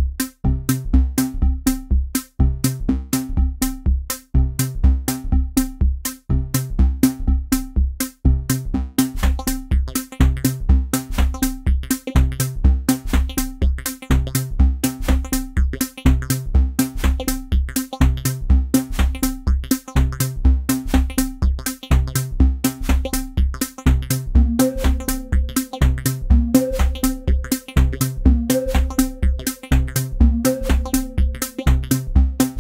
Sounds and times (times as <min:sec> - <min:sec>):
Electronic music: 0:00.0 - 0:32.6.